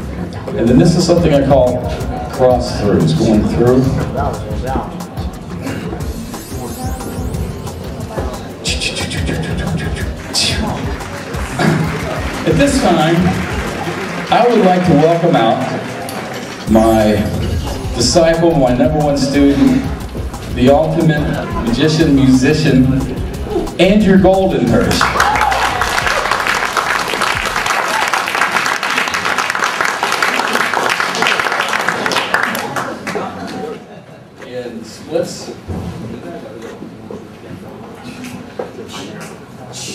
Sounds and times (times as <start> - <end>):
Music: 0.0 - 28.8
Speech: 0.5 - 5.0, 12.5 - 13.4, 14.3 - 15.9, 16.7 - 17.4, 18.0 - 25.0, 33.0 - 36.9.